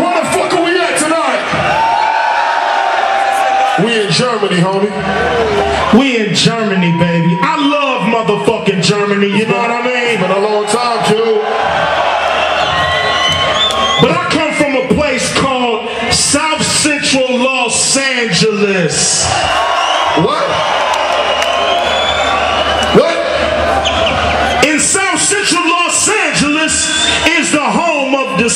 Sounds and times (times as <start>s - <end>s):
Speech: 0.0s - 1.5s, 3.8s - 5.0s, 5.9s - 11.5s, 14.0s - 19.3s, 24.6s - 28.5s.